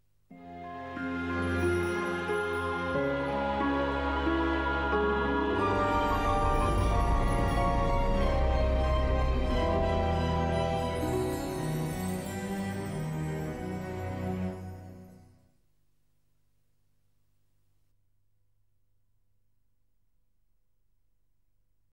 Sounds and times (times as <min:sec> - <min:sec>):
Music: 0:00.3 - 0:15.6.